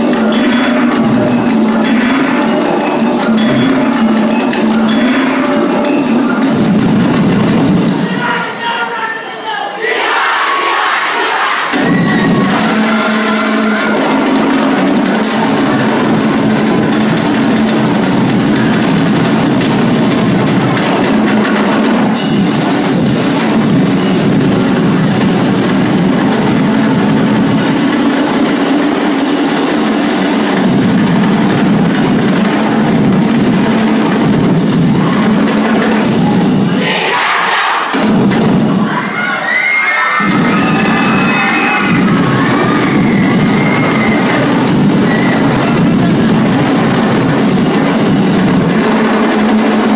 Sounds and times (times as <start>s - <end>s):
Music: 0.0s - 8.4s, 11.7s - 49.9s
Speech: 8.0s - 10.0s.